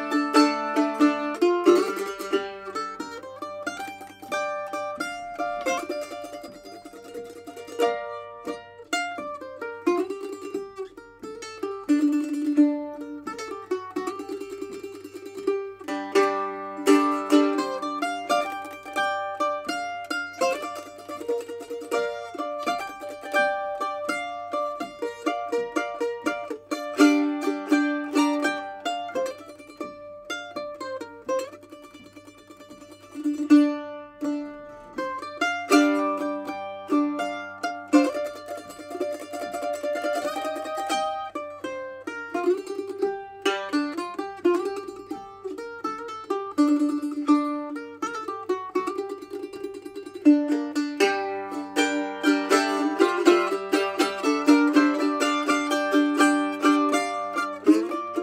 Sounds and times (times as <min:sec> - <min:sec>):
Banjo: 0:00.0 - 0:58.2
Guitar: 0:00.0 - 0:58.2
Mandolin: 0:00.0 - 0:58.2
Zither: 0:00.0 - 0:58.2.